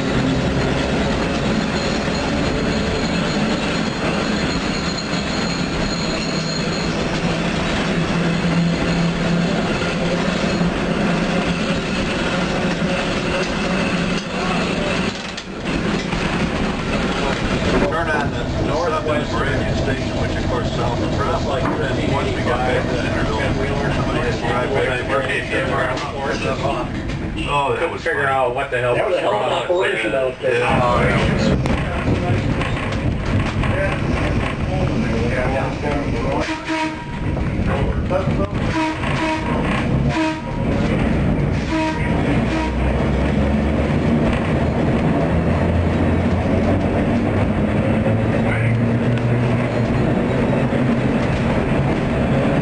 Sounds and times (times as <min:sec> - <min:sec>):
Steam whistle: 0:36.4 - 0:37.2, 0:38.7 - 0:40.6, 0:41.6 - 0:43.0.